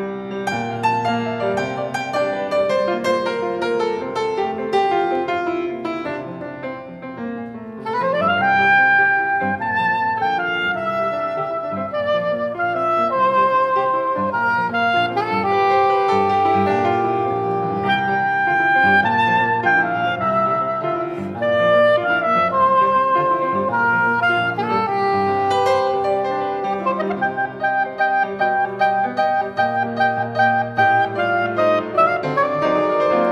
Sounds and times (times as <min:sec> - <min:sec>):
Music: 0:00.0 - 0:33.3.